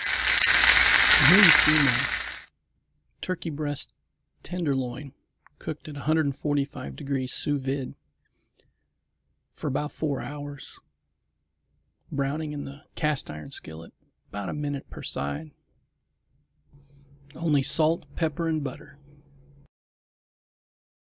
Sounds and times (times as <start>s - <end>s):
Speech: 1.2s - 2.1s, 3.2s - 8.0s, 9.6s - 10.9s, 12.1s - 15.6s, 17.3s - 19.0s.